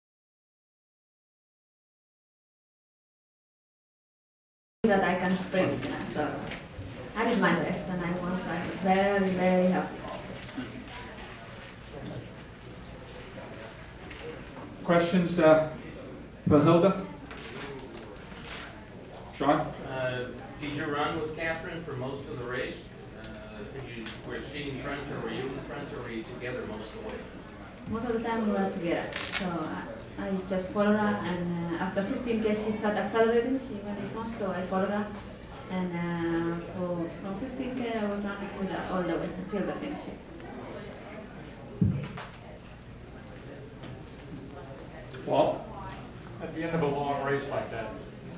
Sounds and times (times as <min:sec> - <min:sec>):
Female speech, woman speaking: 0:04.8 - 0:06.6, 0:07.2 - 0:10.2, 0:27.9 - 0:40.6.